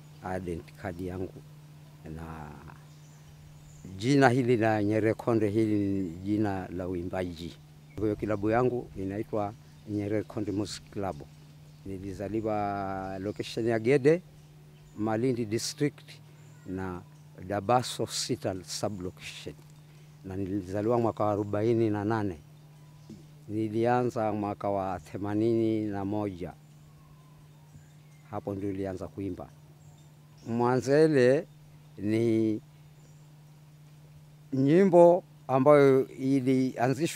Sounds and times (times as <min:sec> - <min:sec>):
Speech: 0:00.2 - 0:01.4, 0:02.1 - 0:02.8, 0:03.9 - 0:11.3, 0:11.9 - 0:14.2, 0:15.0 - 0:19.6, 0:20.3 - 0:22.4, 0:23.5 - 0:26.6, 0:28.3 - 0:29.5, 0:30.5 - 0:32.6, 0:34.5 - 0:37.1.